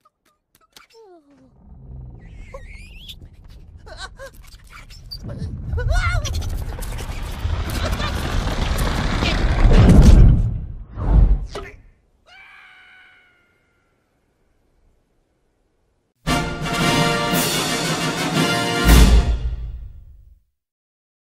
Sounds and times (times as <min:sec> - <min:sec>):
Music: 0:16.2 - 0:20.3.